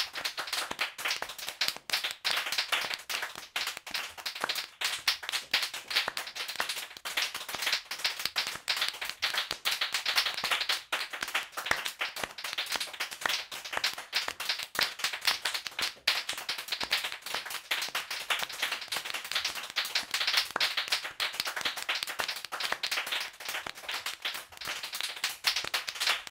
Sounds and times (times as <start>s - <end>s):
Clapping: 0.0s - 26.3s.